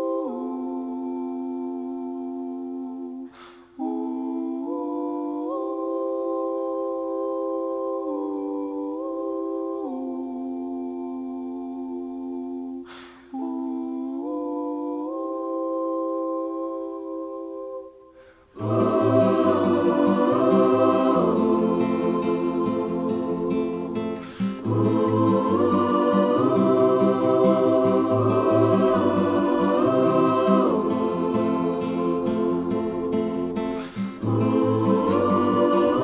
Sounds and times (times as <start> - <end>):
Music: 15.4 - 36.0.